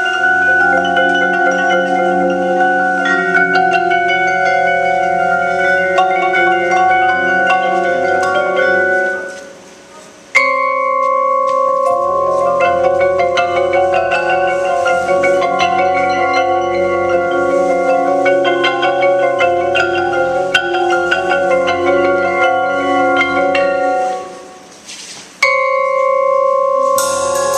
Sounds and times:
Percussion: 0.0s - 27.5s.

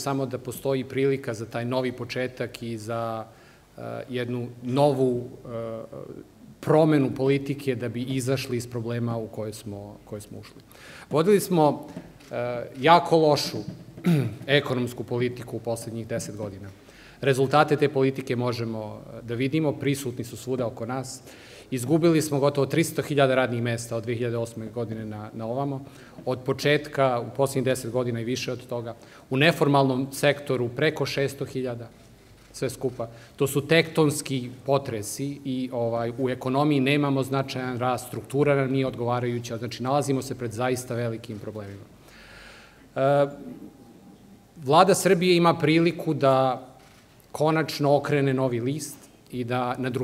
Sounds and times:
Male speech, man speaking: 0.0s - 13.8s, 14.4s - 31.9s, 32.6s - 41.9s, 43.0s - 43.4s, 44.6s - 46.7s, 47.3s - 50.0s.

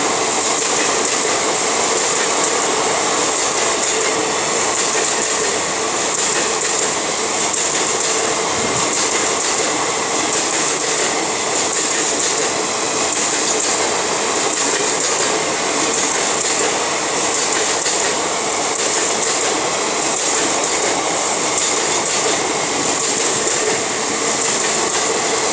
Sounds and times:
Railroad car, train wagon: 0.0s - 25.5s.

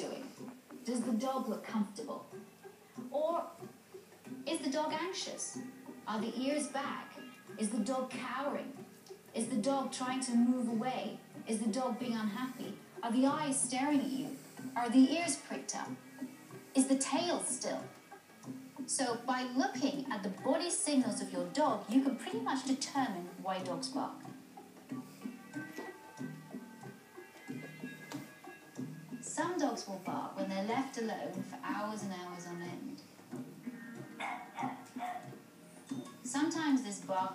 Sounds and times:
Speech: 0.0s - 2.3s, 3.1s - 3.6s, 4.5s - 8.8s, 9.4s - 16.0s, 18.9s - 24.2s, 29.3s - 33.0s, 36.3s - 37.3s.

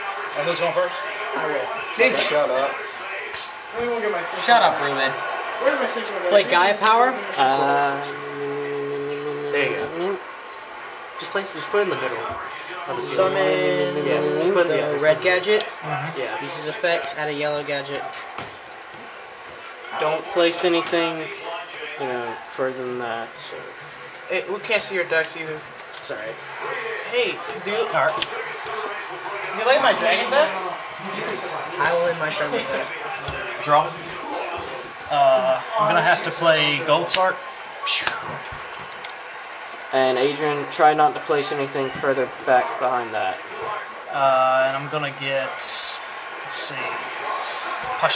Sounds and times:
Speech: 11.2s - 18.1s.

